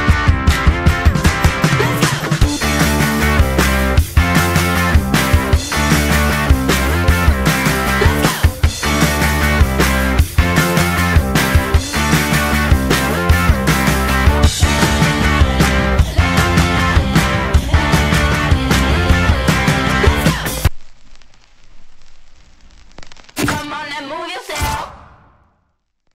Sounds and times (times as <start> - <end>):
Music: 0.0 - 20.7.